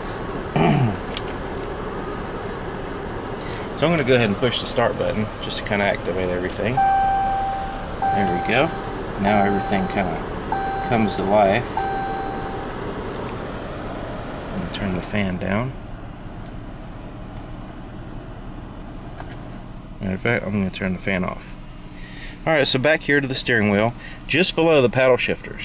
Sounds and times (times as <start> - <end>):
Speech: 3.8 - 6.8, 8.1 - 10.2, 10.9 - 11.7, 14.6 - 15.8, 20.0 - 21.6, 22.4 - 25.6.